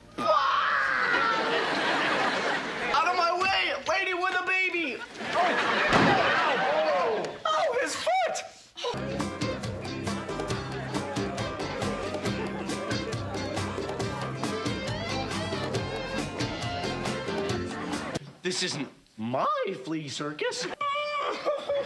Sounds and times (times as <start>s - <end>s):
Music: 8.9s - 18.2s.